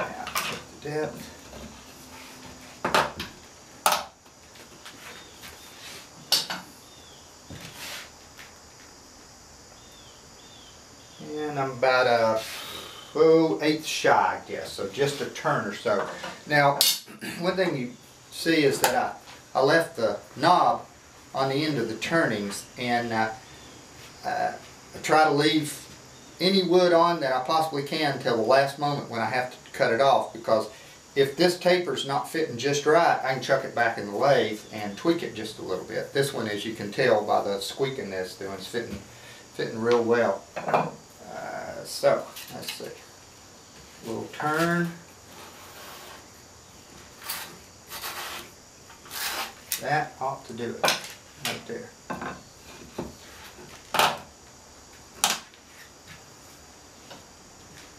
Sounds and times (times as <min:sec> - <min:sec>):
Speech: 0:00.0 - 0:01.4, 0:11.2 - 0:12.5, 0:13.2 - 0:23.4, 0:24.2 - 0:39.0, 0:39.6 - 0:40.4, 0:41.2 - 0:43.0, 0:44.0 - 0:45.0, 0:49.8 - 0:52.0.